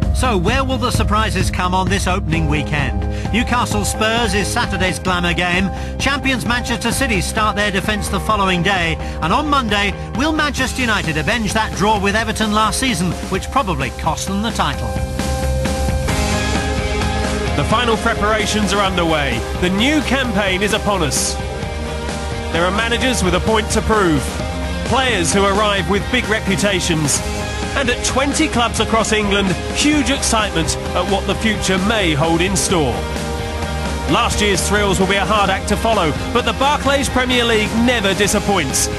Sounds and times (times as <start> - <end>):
Music: 0.0 - 38.9
Speech: 0.1 - 15.0, 17.6 - 21.4, 22.5 - 27.2, 27.8 - 33.0, 34.1 - 38.9.